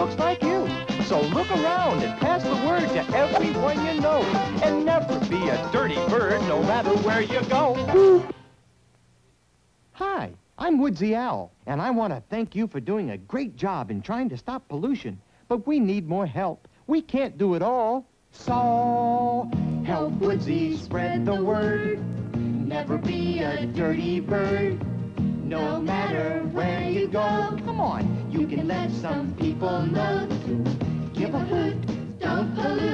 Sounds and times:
Speech: 0.0 - 8.2, 10.0 - 18.1
Music: 0.0 - 8.5, 18.4 - 32.9.

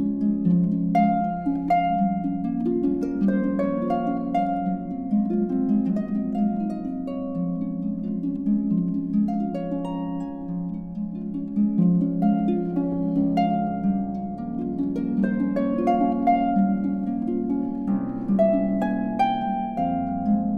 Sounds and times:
Harp: 0.0 - 20.5.

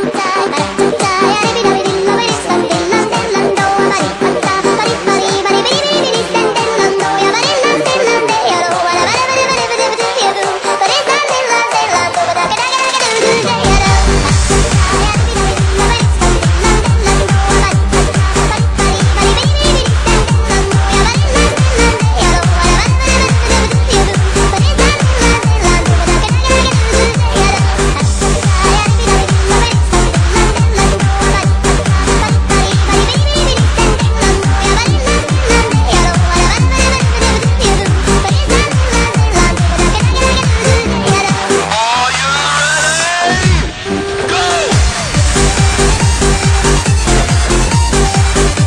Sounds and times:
Music: 0.0 - 48.6.

